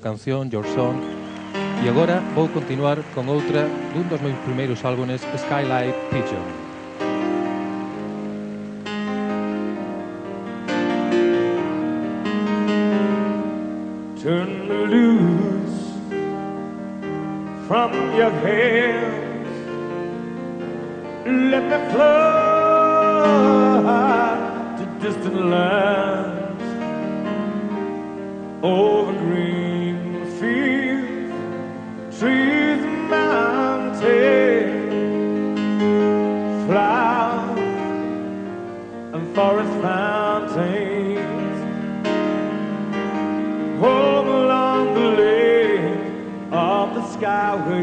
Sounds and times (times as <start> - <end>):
Speech: 0.0 - 1.0, 1.8 - 6.6
Music: 0.0 - 47.8.